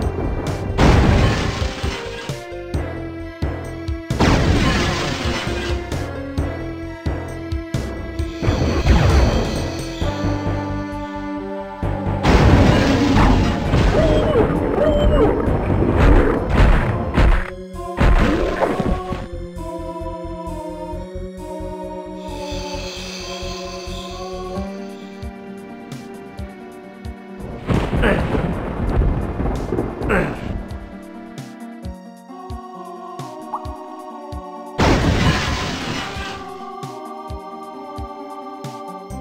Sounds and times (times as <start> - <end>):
Music: 0.0 - 39.2.